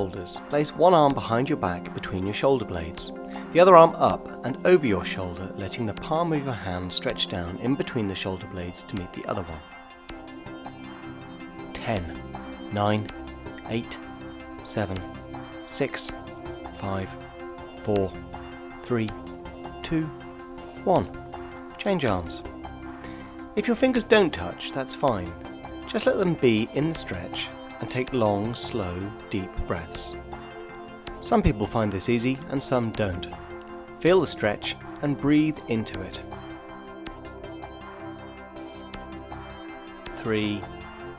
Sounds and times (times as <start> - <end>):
Speech: 0.0 - 9.6, 11.8 - 13.1, 13.7 - 14.0, 14.6 - 15.1, 15.7 - 16.2, 16.8 - 17.2, 17.8 - 18.2, 18.8 - 19.2, 19.8 - 20.1, 20.8 - 21.1, 21.8 - 22.4, 23.6 - 25.3, 25.9 - 30.2, 31.2 - 33.4, 34.0 - 36.2, 40.2 - 40.8
Music: 0.0 - 41.1.